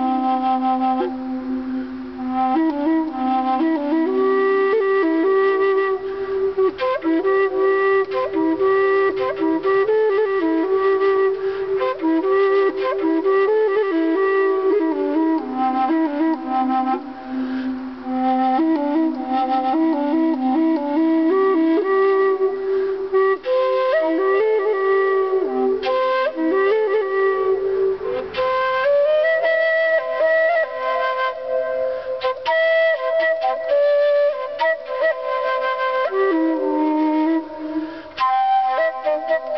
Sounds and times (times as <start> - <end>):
Flute: 0.0 - 39.5.